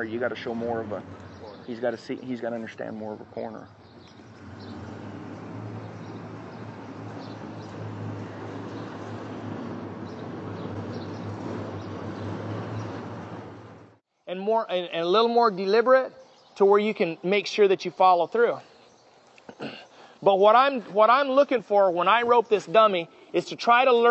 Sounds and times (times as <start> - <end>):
Speech: 0.0 - 3.7, 14.3 - 18.6, 20.2 - 24.1.